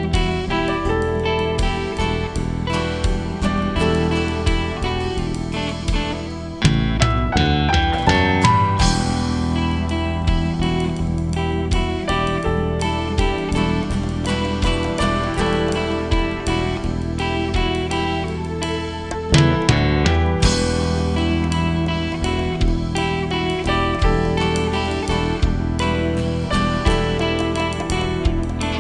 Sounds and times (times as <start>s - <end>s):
Music: 0.0s - 28.8s.